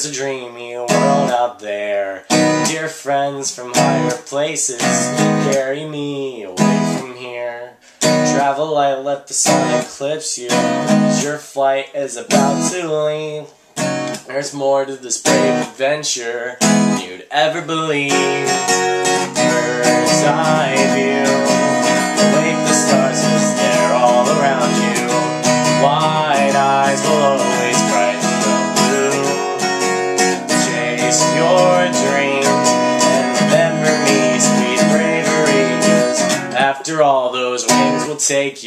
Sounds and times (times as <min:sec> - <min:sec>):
Music: 0:00.0 - 0:05.8, 0:06.6 - 0:08.6, 0:09.4 - 0:11.4, 0:12.2 - 0:13.2, 0:13.8 - 0:15.8, 0:16.5 - 0:38.5.